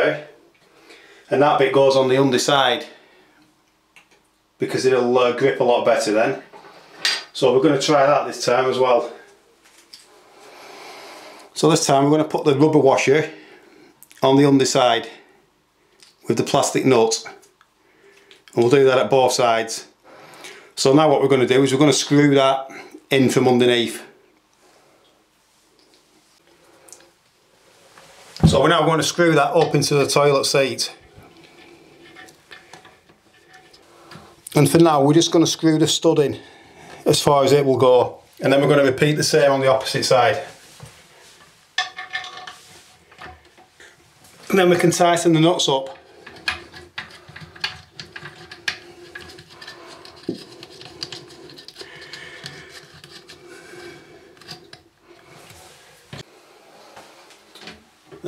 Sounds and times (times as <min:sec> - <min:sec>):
Speech: 0:00.0 - 0:00.4, 0:01.3 - 0:03.0, 0:04.6 - 0:06.5, 0:07.3 - 0:09.3, 0:11.6 - 0:13.4, 0:14.2 - 0:15.2, 0:16.2 - 0:17.4, 0:18.6 - 0:20.0, 0:20.8 - 0:24.2, 0:28.4 - 0:31.0, 0:34.5 - 0:40.6, 0:44.5 - 0:46.0.